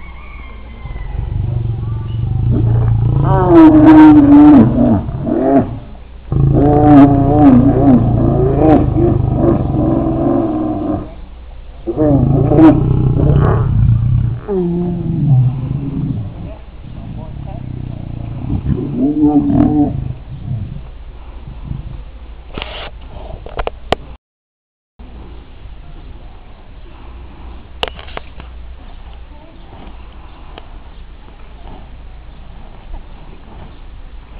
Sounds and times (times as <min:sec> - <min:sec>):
Roaring cats (lions, tigers): 0:00.8 - 0:11.2, 0:11.9 - 0:20.9.